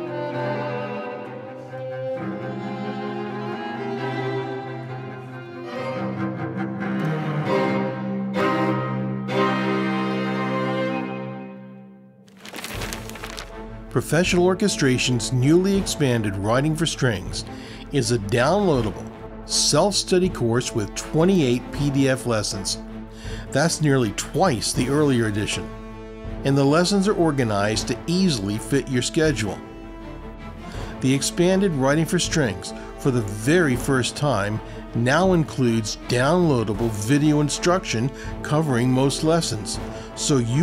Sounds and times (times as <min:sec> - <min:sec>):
Music: 0:00.0 - 0:40.6
Speech: 0:14.0 - 0:22.8, 0:23.5 - 0:25.7, 0:26.4 - 0:29.6, 0:31.0 - 0:40.6.